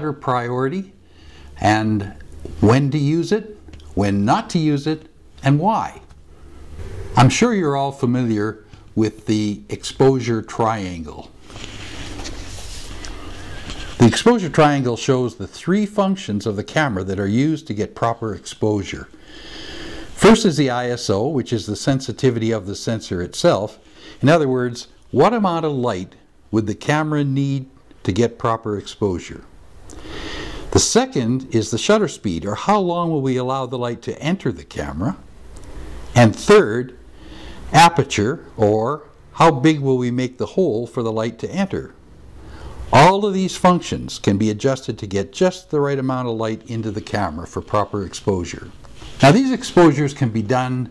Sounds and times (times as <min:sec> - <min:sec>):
Speech: 0:00.0 - 0:01.0, 0:01.6 - 0:06.1, 0:07.2 - 0:11.3, 0:14.0 - 0:19.1, 0:20.2 - 0:29.5, 0:30.7 - 0:35.2, 0:36.2 - 0:37.0, 0:37.7 - 0:42.0, 0:42.9 - 0:50.9.